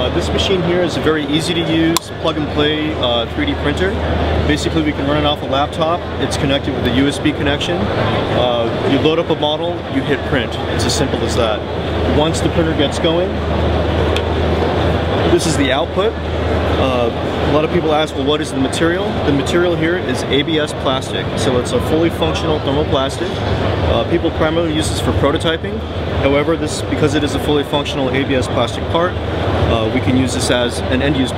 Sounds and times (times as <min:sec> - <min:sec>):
Speech: 0:00.0 - 0:13.4, 0:15.3 - 0:16.2, 0:16.8 - 0:31.3.